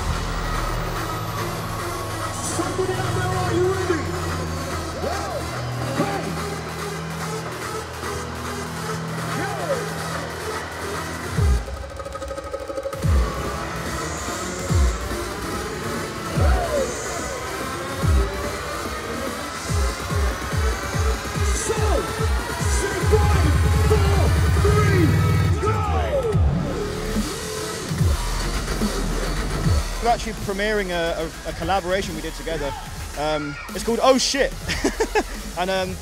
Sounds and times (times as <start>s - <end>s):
Dubstep: 0.0s - 36.0s.